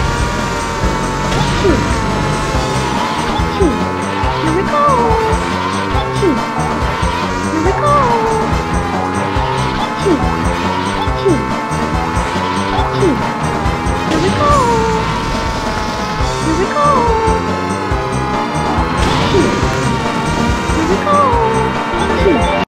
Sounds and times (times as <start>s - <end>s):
Music: 0.0s - 22.6s
Speech: 4.4s - 5.4s, 7.6s - 8.4s, 14.1s - 15.0s, 16.5s - 17.4s, 20.8s - 22.4s.